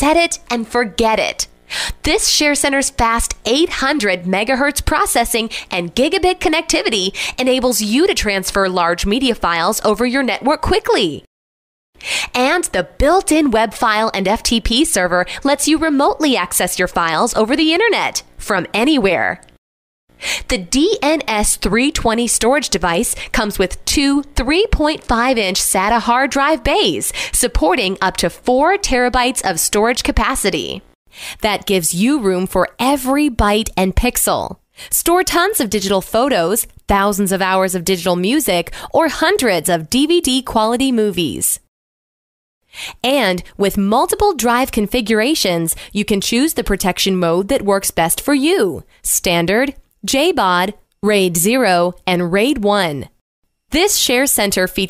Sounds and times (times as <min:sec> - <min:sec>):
Speech: 0:00.0 - 0:11.3, 0:12.3 - 0:19.5, 0:20.5 - 0:41.7, 0:43.0 - 0:54.8.